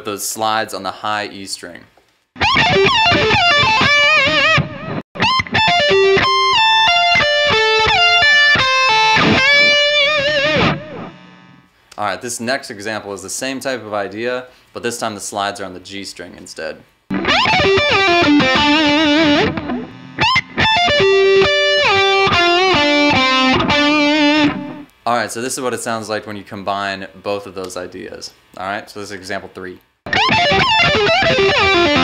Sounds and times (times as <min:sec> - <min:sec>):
Speech: 0:00.0 - 0:01.9, 0:12.0 - 0:16.9, 0:25.0 - 0:29.8
Electric guitar: 0:02.4 - 0:11.6, 0:17.1 - 0:24.9, 0:30.1 - 0:32.0
Strum: 0:05.8 - 0:11.6, 0:17.1 - 0:24.9, 0:30.1 - 0:32.0.